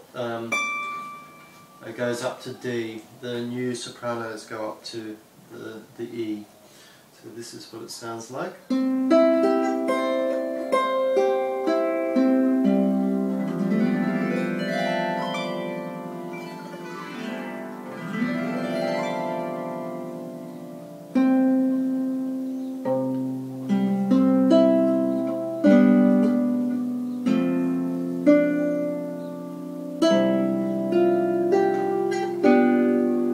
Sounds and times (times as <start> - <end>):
Music: 0.6 - 1.8, 8.7 - 33.3.